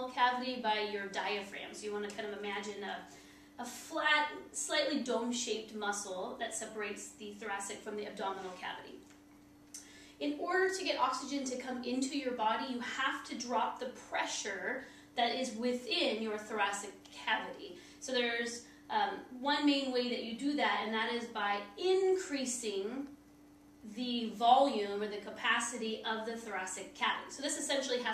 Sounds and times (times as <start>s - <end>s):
Speech: 0.0s - 9.0s, 10.2s - 23.1s, 23.8s - 28.1s.